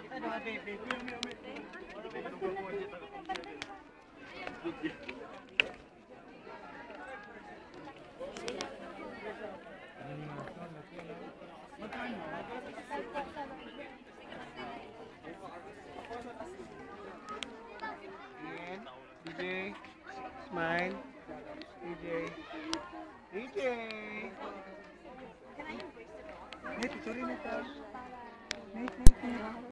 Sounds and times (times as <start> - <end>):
Speech: 0.0 - 29.7.